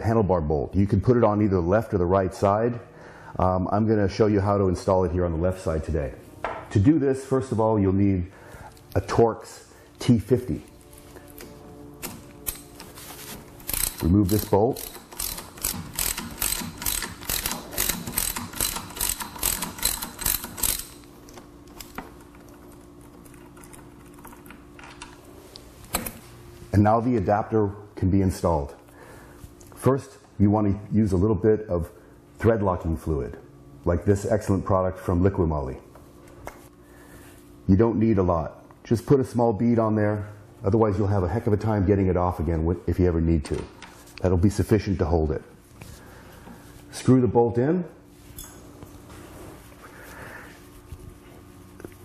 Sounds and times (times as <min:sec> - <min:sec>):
Speech: 0:00.0 - 0:02.8, 0:03.4 - 0:08.3, 0:09.0 - 0:10.7, 0:14.0 - 0:14.9, 0:26.7 - 0:28.8, 0:29.8 - 0:35.9, 0:37.7 - 0:45.5, 0:46.9 - 0:48.0
Music: 0:09.5 - 0:16.2.